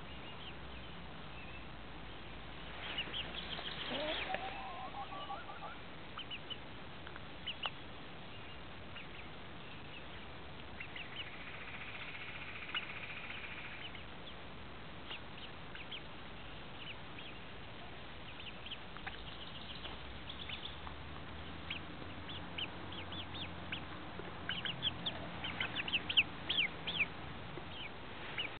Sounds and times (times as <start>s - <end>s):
Bird: 2.7s - 6.6s, 7.4s - 14.4s, 15.0s - 28.5s.